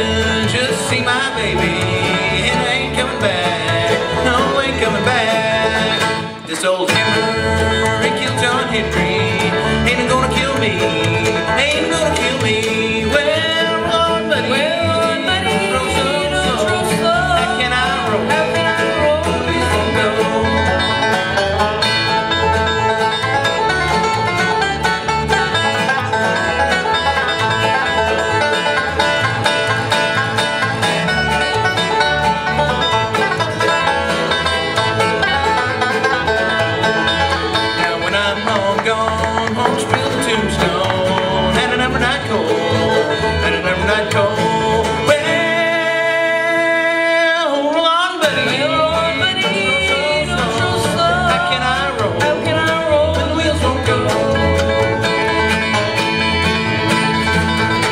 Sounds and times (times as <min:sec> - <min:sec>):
Banjo: 0:00.0 - 0:57.9
Bluegrass: 0:00.0 - 0:57.9
Guitar: 0:00.0 - 0:57.9.